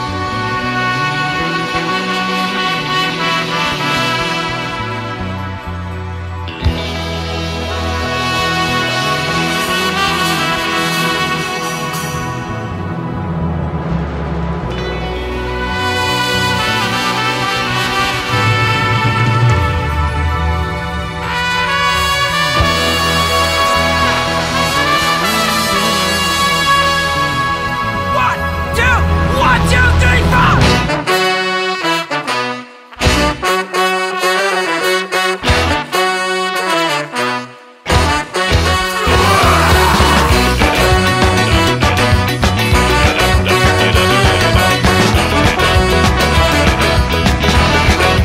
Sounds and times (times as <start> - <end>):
Music: 0.0 - 48.2.